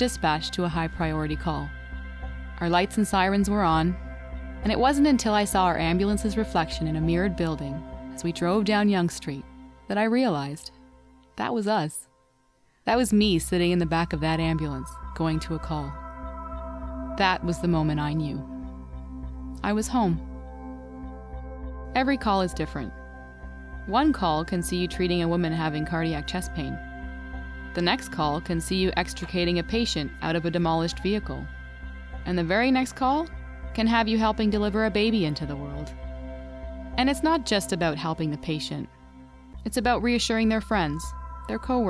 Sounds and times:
Speech: 0.0s - 1.7s, 2.6s - 4.0s, 4.6s - 10.7s, 11.4s - 12.1s, 12.9s - 16.0s, 17.2s - 18.4s, 19.6s - 20.2s, 22.0s - 22.9s, 23.9s - 26.8s, 27.8s - 31.5s, 32.3s - 35.9s, 37.0s - 38.9s, 39.7s - 41.9s
Music: 0.0s - 41.9s.

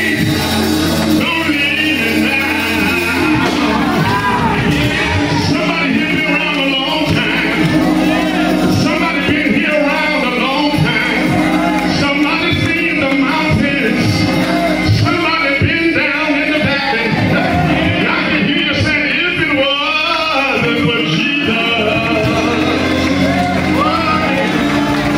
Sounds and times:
Male singing: 0.0s - 25.1s
Music: 0.0s - 25.1s.

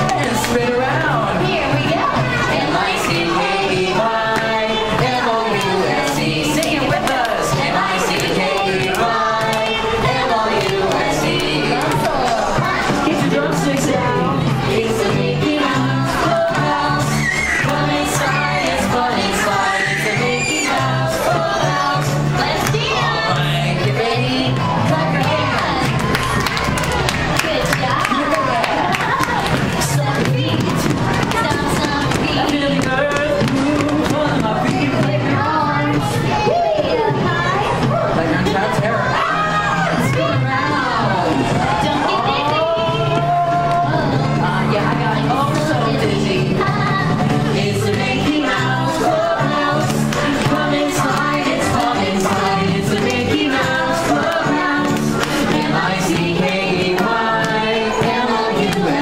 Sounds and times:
Music: 0.0s - 59.0s
Speech: 27.2s - 47.2s.

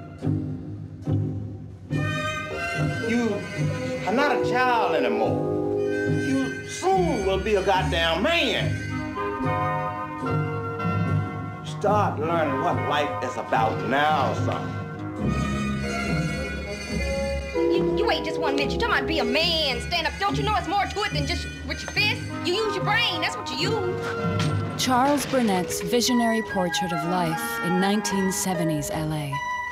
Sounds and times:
Music: 0.0s - 29.7s.

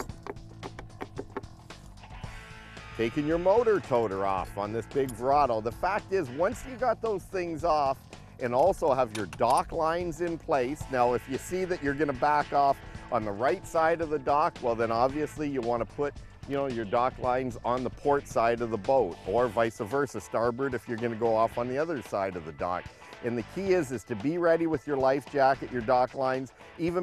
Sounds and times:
Music: 0.0s - 27.0s
Speech: 3.0s - 27.0s.

